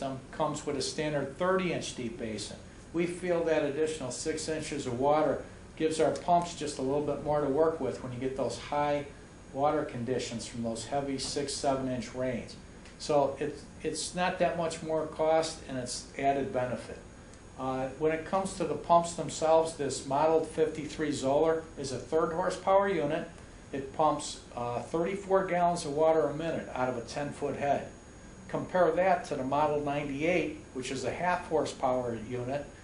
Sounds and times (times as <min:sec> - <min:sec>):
Speech: 0:00.0 - 0:32.7.